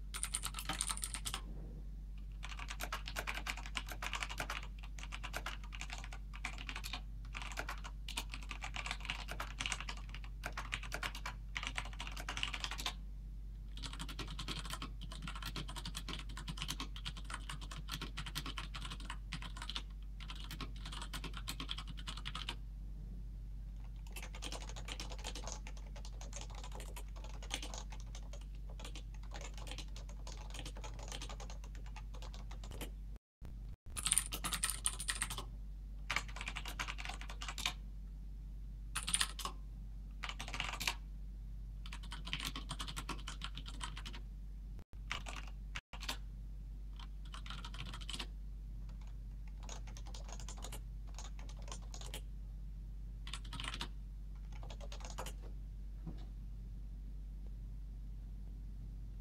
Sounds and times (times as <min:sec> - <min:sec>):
Computer keyboard: 0:00.1 - 0:01.4, 0:02.3 - 0:13.0, 0:13.7 - 0:22.6, 0:23.8 - 0:32.9, 0:33.9 - 0:35.5, 0:36.1 - 0:37.8, 0:39.0 - 0:39.6, 0:40.2 - 0:41.0, 0:41.8 - 0:44.2, 0:45.1 - 0:46.2, 0:47.0 - 0:48.3, 0:48.9 - 0:52.3, 0:53.3 - 0:55.4.